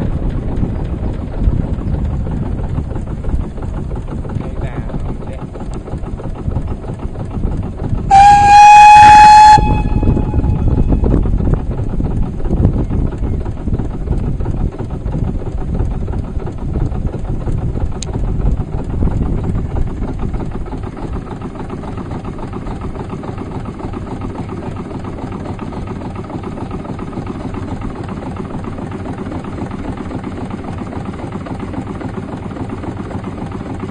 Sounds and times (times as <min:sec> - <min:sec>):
Speech: 0:04.4 - 0:05.6.